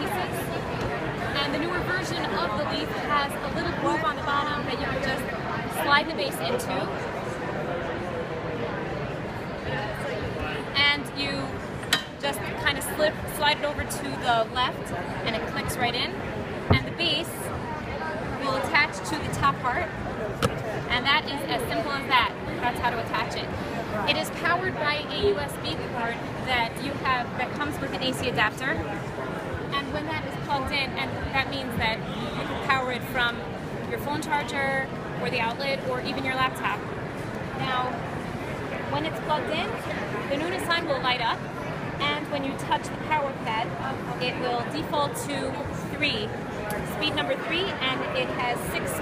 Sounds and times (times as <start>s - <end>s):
Speech: 0.0s - 8.2s, 9.7s - 11.6s, 12.2s - 20.0s, 20.7s - 29.0s, 29.7s - 36.9s, 37.6s - 38.0s, 38.9s - 49.0s.